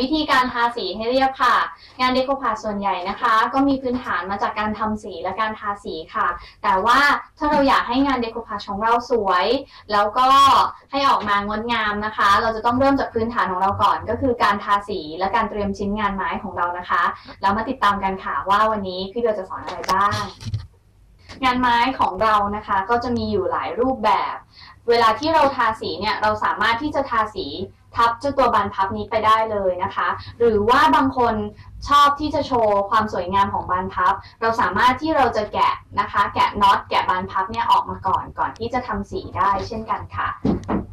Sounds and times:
Speech: 0:00.0 - 0:20.6, 0:21.3 - 0:40.5.

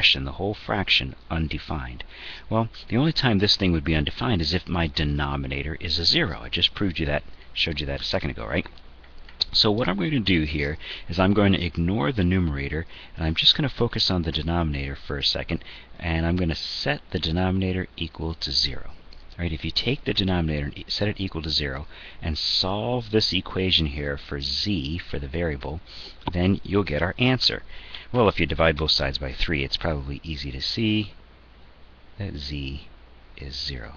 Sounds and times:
Speech: 0:00.0 - 0:08.8, 0:09.4 - 0:31.2, 0:32.2 - 0:33.9.

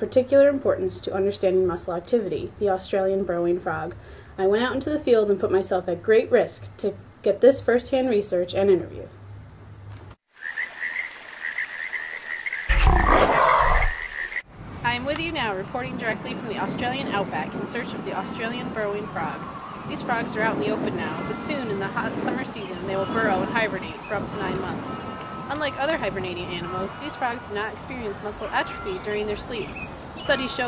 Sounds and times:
Frog: 0:10.4 - 0:14.4.

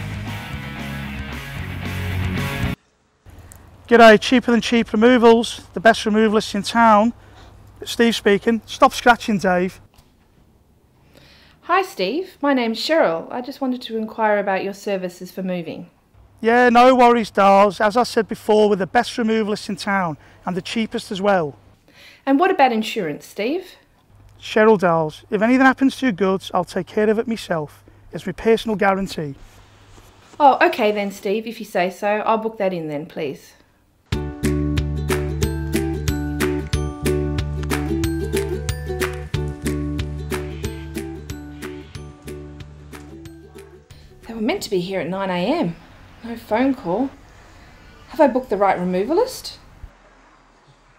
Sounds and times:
Speech: 0:03.9 - 0:07.2, 0:07.8 - 0:09.8, 0:11.7 - 0:21.6, 0:22.3 - 0:23.8, 0:24.4 - 0:29.4, 0:30.4 - 0:33.6, 0:43.6 - 0:47.2, 0:48.1 - 0:49.6.

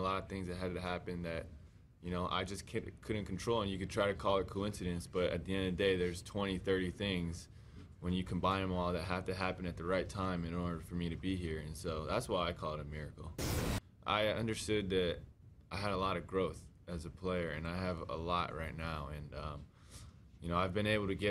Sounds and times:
Male speech, man speaking: 0:00.0 - 0:13.4, 0:14.0 - 0:19.7, 0:20.4 - 0:21.3.

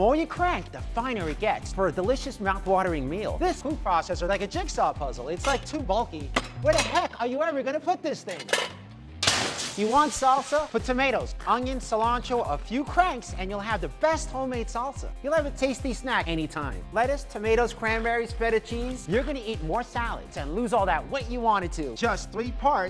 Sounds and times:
Speech: 0:00.0 - 0:08.5, 0:09.8 - 0:22.8
Music: 0:00.0 - 0:22.8.

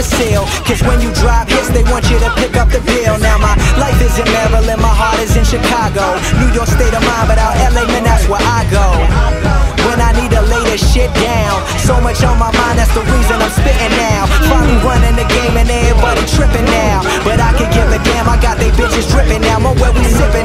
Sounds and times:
Music: 0:00.0 - 0:20.4.

